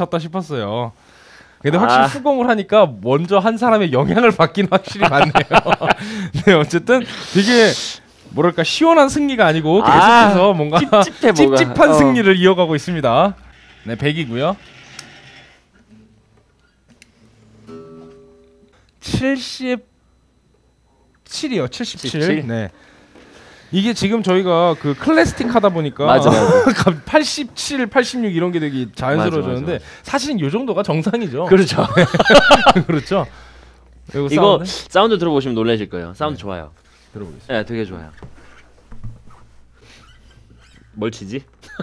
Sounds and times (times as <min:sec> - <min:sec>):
Speech: 0:00.0 - 0:01.0, 0:01.6 - 0:05.4, 0:06.4 - 0:14.6, 0:19.0 - 0:19.9, 0:21.2 - 0:22.8, 0:23.7 - 0:32.1, 0:34.1 - 0:38.2, 0:41.0 - 0:41.5.